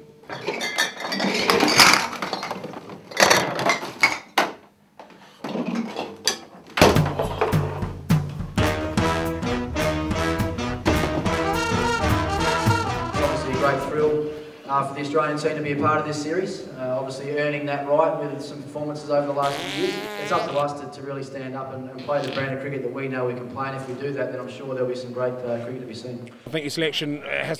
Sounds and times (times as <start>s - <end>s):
Music: 6.8s - 14.4s
Speech: 13.2s - 19.5s, 20.2s - 27.5s.